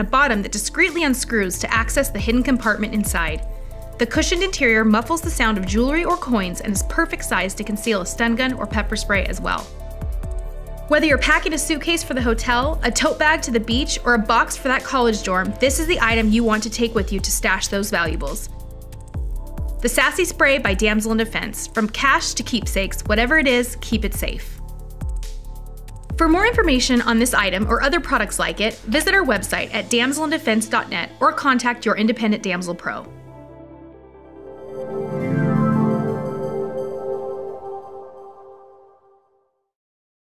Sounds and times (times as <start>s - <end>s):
Speech: 0.0s - 3.4s, 4.0s - 9.7s, 10.9s - 18.5s, 19.8s - 24.6s, 26.2s - 33.1s
Music: 0.0s - 39.8s.